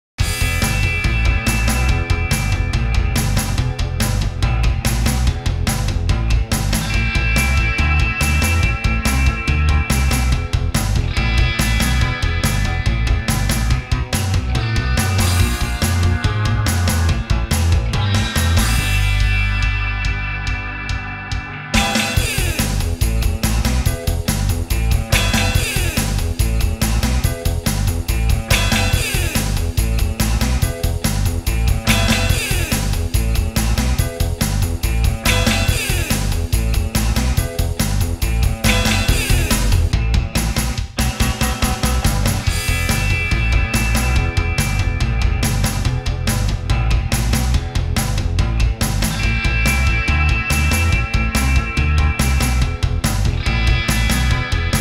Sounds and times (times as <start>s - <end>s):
Music: 0.1s - 54.8s.